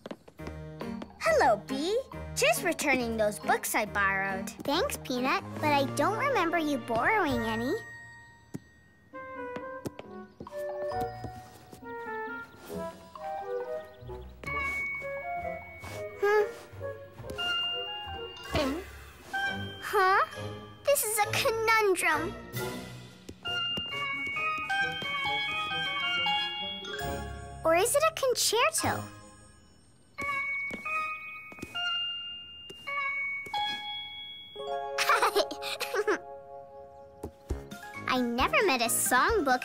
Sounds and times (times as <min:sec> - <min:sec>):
Music: 0:00.3 - 0:39.6
Child speech, kid speaking: 0:01.2 - 0:07.8, 0:19.8 - 0:20.3, 0:20.9 - 0:22.4, 0:27.6 - 0:29.1, 0:38.1 - 0:39.6.